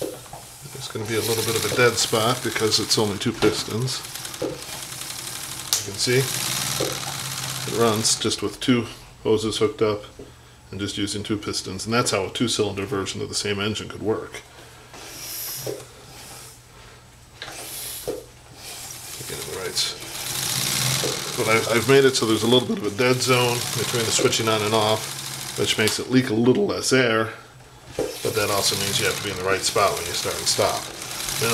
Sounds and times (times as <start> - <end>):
Speech: 0.6 - 4.1, 5.8 - 6.4, 7.7 - 14.5, 19.2 - 20.0, 21.3 - 27.4, 28.2 - 31.5
Engine: 0.7 - 8.4, 19.1 - 26.1, 27.9 - 31.5.